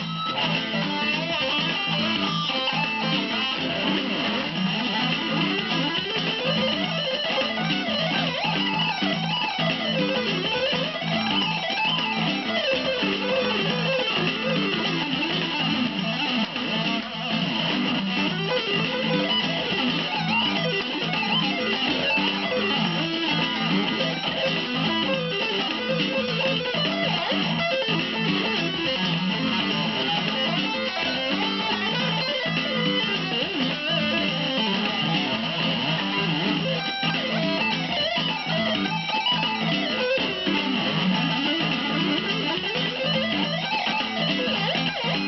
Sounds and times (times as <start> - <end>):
Electric guitar: 0.0 - 45.2.